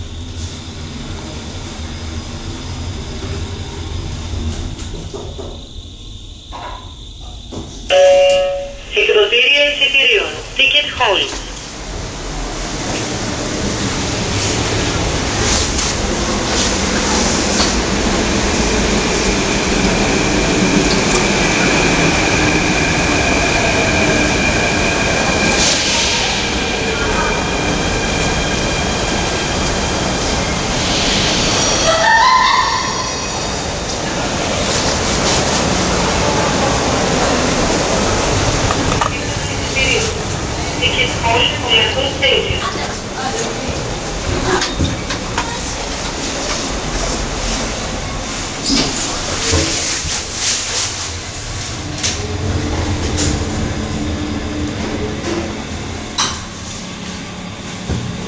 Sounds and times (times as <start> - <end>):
Speech: 8.8 - 11.6, 39.0 - 43.8.